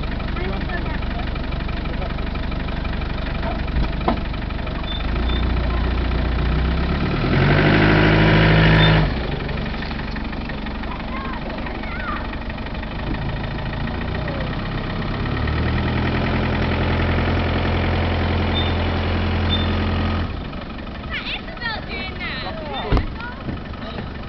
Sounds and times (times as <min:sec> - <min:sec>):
Car: 0:00.0 - 0:24.2.